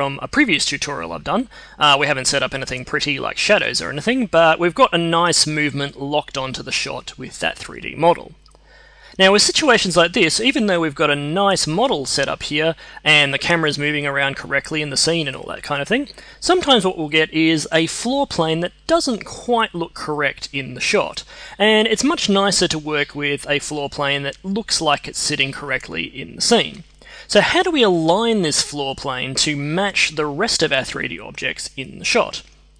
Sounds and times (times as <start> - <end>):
Speech: 0.0 - 8.4, 9.2 - 32.5.